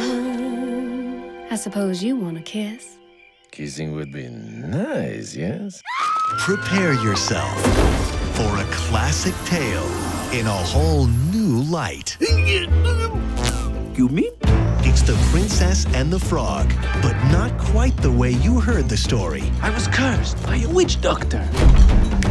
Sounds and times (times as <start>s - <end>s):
Music: 0.0s - 4.3s, 6.3s - 22.3s
Speech: 3.5s - 5.8s, 14.0s - 21.5s.